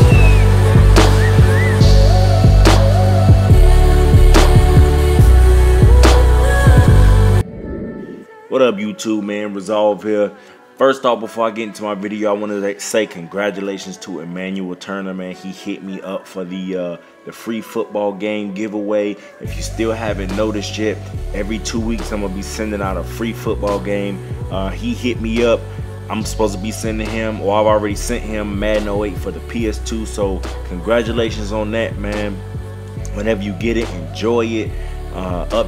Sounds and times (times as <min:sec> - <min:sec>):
Music: 0:00.0 - 0:35.6
Speech: 0:08.5 - 0:32.4, 0:33.1 - 0:35.6.